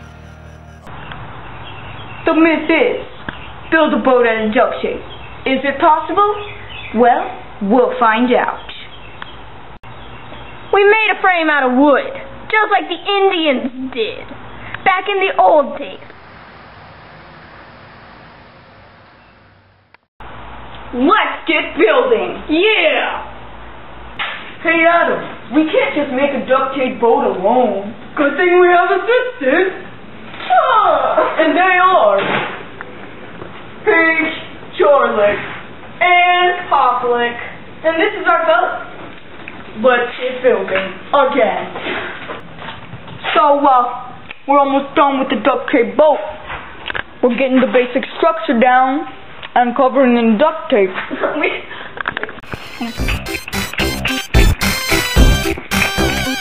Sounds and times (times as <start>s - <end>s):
Speech: 3.7s - 8.8s, 10.8s - 16.0s, 20.9s - 23.3s, 24.6s - 29.9s, 30.5s - 32.3s, 33.8s - 38.9s, 39.8s - 41.8s, 43.3s - 46.4s, 47.2s - 51.7s.